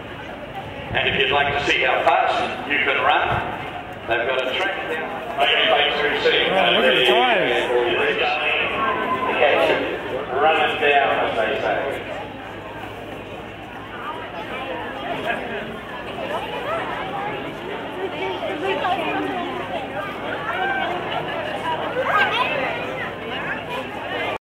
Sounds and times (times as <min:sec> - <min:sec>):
Speech: 0:00.0 - 0:12.9, 0:13.7 - 0:24.4.